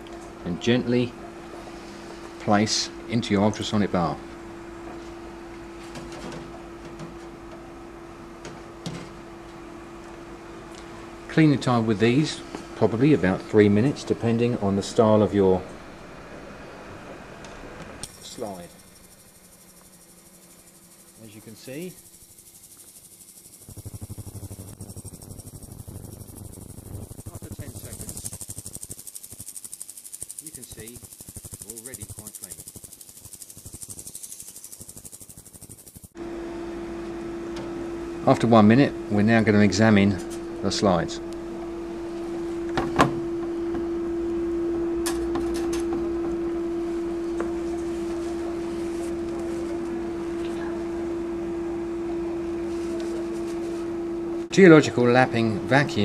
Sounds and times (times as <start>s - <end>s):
Speech: 0.4s - 1.2s, 2.4s - 4.2s, 11.3s - 15.7s, 18.2s - 18.7s, 21.2s - 22.0s, 27.3s - 28.3s, 30.4s - 31.0s, 31.6s - 32.6s, 38.2s - 41.2s, 54.5s - 56.0s.